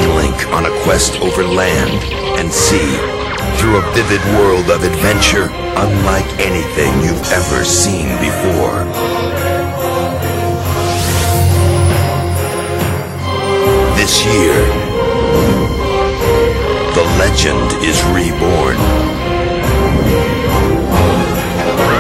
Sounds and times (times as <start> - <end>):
Speech: 0.0 - 9.0, 13.9 - 14.8, 16.9 - 18.8
Music: 0.0 - 22.0.